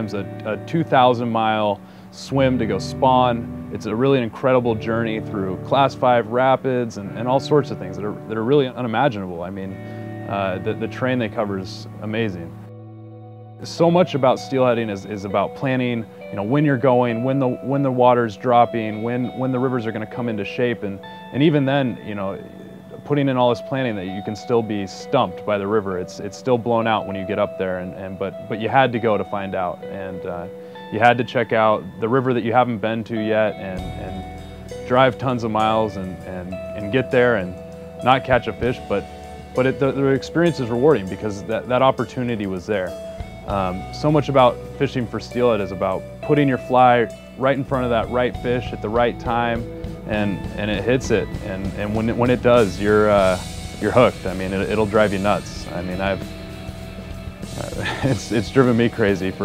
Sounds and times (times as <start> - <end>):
Speech: 0.0 - 12.5, 13.6 - 34.3, 34.9 - 39.0, 39.6 - 56.3, 57.6 - 59.4
Music: 0.0 - 59.4.